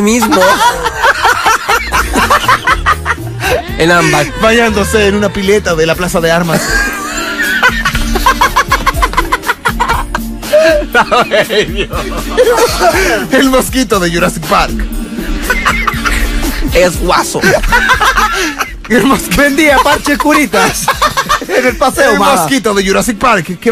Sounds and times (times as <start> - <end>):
Speech: 0.0 - 0.6, 3.7 - 6.6, 13.3 - 14.8, 18.9 - 20.9, 21.6 - 23.7
Music: 0.0 - 23.7.